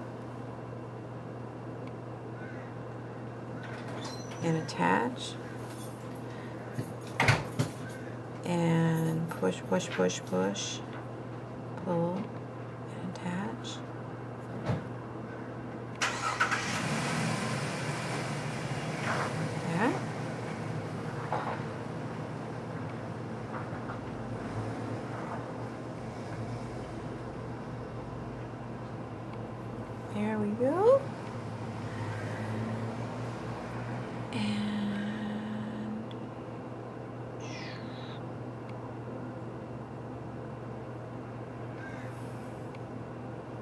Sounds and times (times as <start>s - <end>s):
Speech: 4.4s - 5.4s, 8.5s - 10.9s, 11.8s - 12.2s, 12.9s - 13.9s, 19.7s - 20.0s, 30.1s - 31.1s.